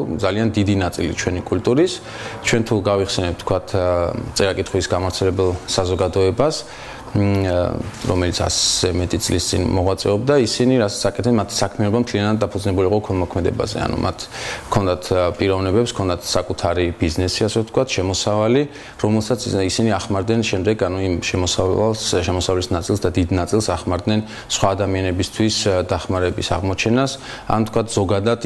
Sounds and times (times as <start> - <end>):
Male speech, man speaking: 0.0 - 28.4
Narration, monologue: 0.0 - 28.4.